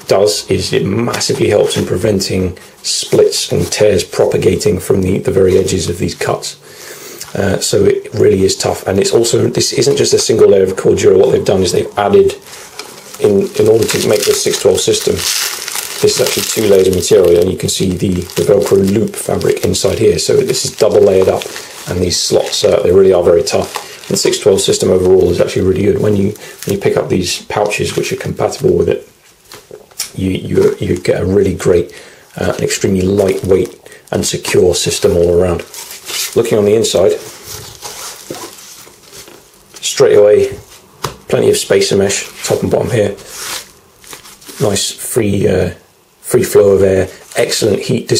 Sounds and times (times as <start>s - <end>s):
Speech: 0.0s - 6.6s, 7.2s - 12.5s, 13.2s - 15.4s, 16.0s - 29.1s, 30.0s - 35.7s, 36.3s - 37.3s, 39.8s - 40.7s, 41.3s - 43.3s, 44.6s - 48.1s.